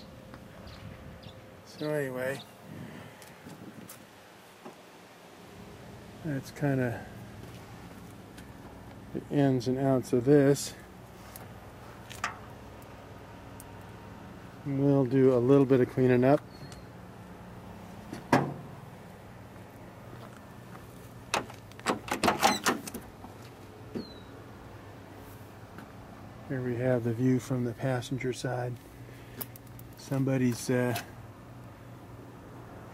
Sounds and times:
Speech: 0:01.7 - 0:02.5, 0:06.2 - 0:07.1, 0:09.1 - 0:10.8, 0:14.6 - 0:16.4, 0:26.5 - 0:28.8, 0:30.0 - 0:31.1.

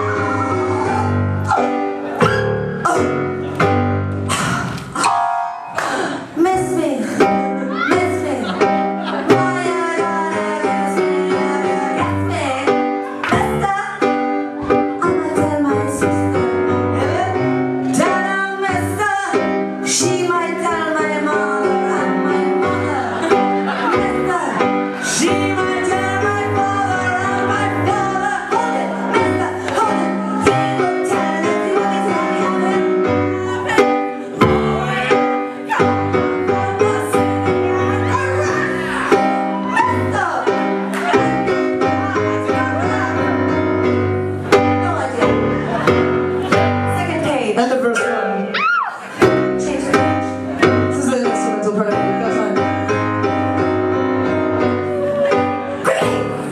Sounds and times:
Music: 0:00.0 - 0:56.5.

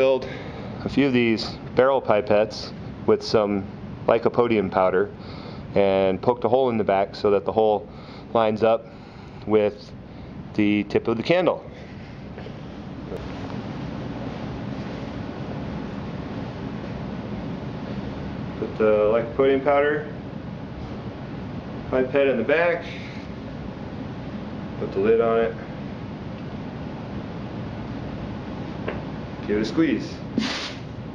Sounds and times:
Speech: 0:00.0 - 0:05.2, 0:05.8 - 0:08.9, 0:09.5 - 0:09.9, 0:10.6 - 0:11.7, 0:18.6 - 0:20.2, 0:21.9 - 0:23.0, 0:24.8 - 0:25.6, 0:29.4 - 0:30.3.

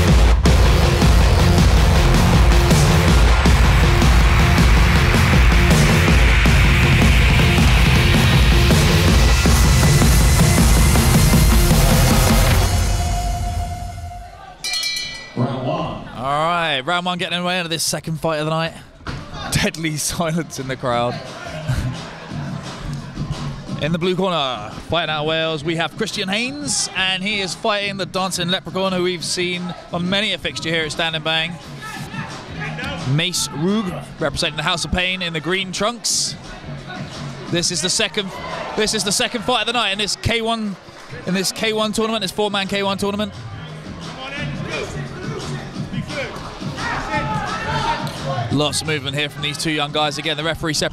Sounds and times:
Music: 0:00.0 - 0:18.3, 0:19.0 - 0:50.9
Speech: 0:15.4 - 0:21.4, 0:23.8 - 0:43.4, 0:46.9 - 0:50.9.

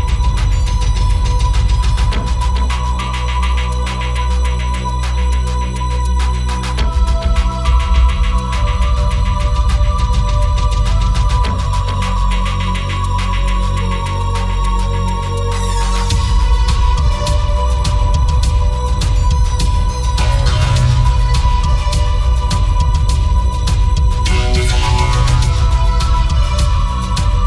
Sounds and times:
Electronic music: 0:00.0 - 0:27.4.

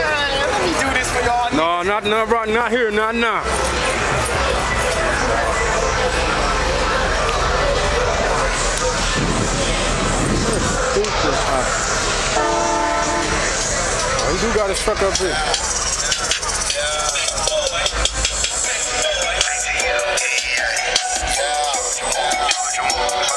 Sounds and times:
Speech: 0:00.0 - 0:12.0, 0:13.5 - 0:15.8
Car: 0:00.0 - 0:23.3
Outside, urban or manmade: 0:00.0 - 0:23.3.

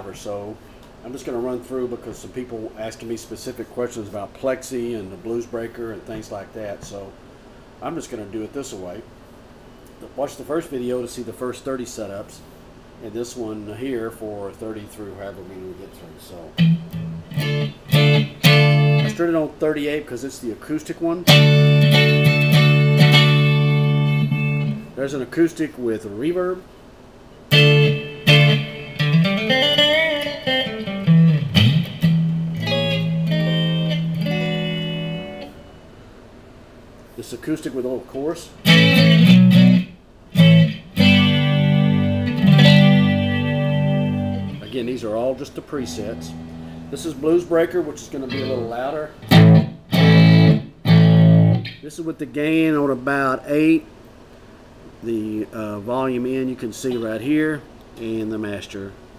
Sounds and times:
Speech: 0:00.0 - 0:07.2, 0:07.8 - 0:09.1, 0:10.0 - 0:16.6, 0:19.1 - 0:21.3, 0:25.0 - 0:26.7, 0:37.2 - 0:38.6, 0:44.6 - 0:49.2, 0:51.8 - 0:53.9, 0:55.0 - 0:59.0
Electric guitar: 0:16.6 - 0:19.2, 0:21.2 - 0:24.9, 0:27.5 - 0:35.7, 0:38.6 - 0:44.8, 0:45.7 - 0:47.4, 0:48.1 - 0:51.8
Tapping (guitar technique): 0:16.6 - 0:19.2, 0:21.3 - 0:24.9, 0:27.5 - 0:35.6, 0:38.6 - 0:44.7, 0:45.8 - 0:47.2, 0:48.3 - 0:51.8.

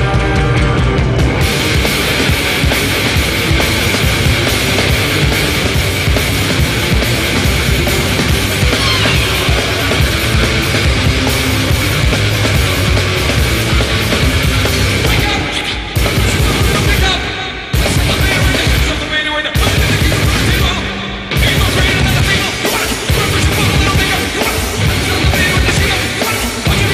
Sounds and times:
Music: 0:00.0 - 0:26.9.

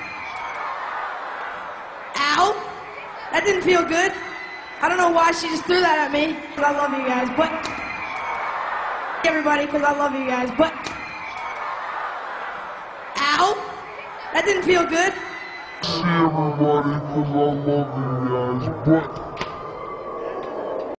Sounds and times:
Speech: 0:15.8 - 0:19.1.

